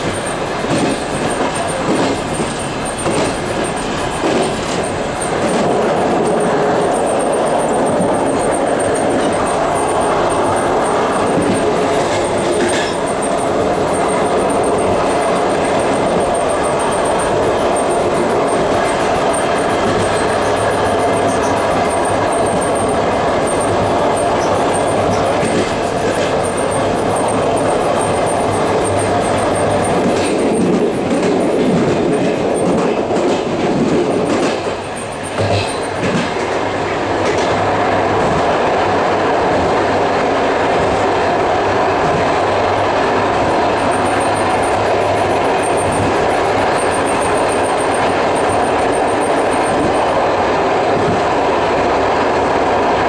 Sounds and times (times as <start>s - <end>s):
Clickety-clack: 0.0s - 53.0s
Railroad car, train wagon: 0.0s - 53.0s
Train: 0.0s - 53.0s.